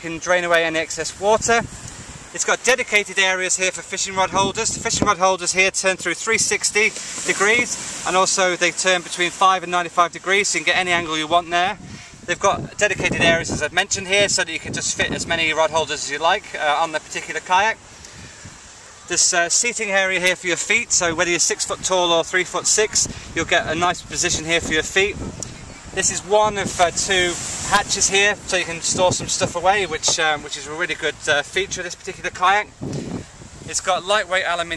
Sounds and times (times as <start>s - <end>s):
Speech: 0.0s - 1.7s, 2.4s - 17.8s, 19.1s - 25.2s, 26.0s - 32.7s, 33.6s - 34.7s.